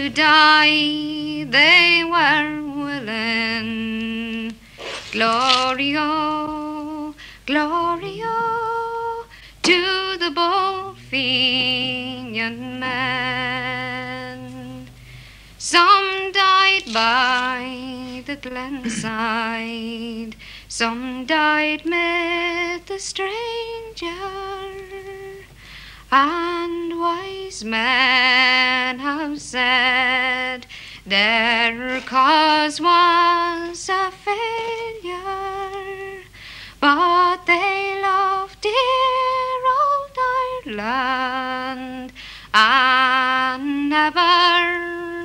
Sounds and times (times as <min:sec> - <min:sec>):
Singing: 0:00.0 - 0:15.0, 0:15.6 - 0:25.5, 0:26.2 - 0:36.2
Inside, small room: 0:00.0 - 0:45.2.